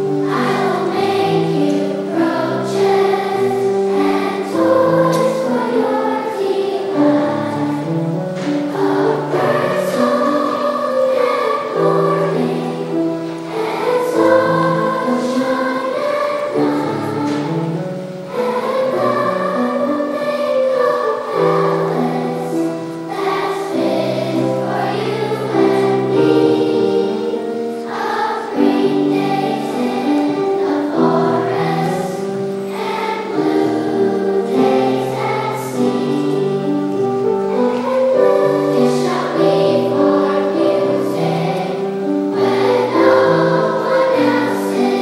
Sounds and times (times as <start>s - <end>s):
Music: 0.0s - 45.0s.